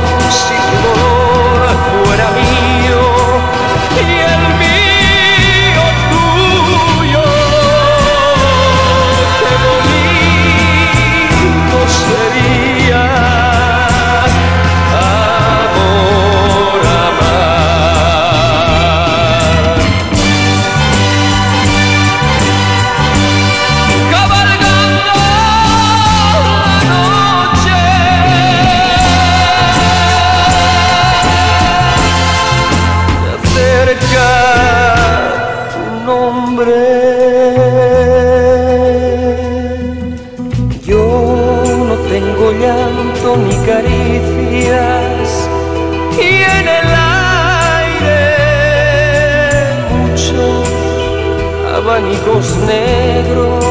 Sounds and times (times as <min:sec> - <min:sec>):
Music: 0:00.0 - 0:53.7.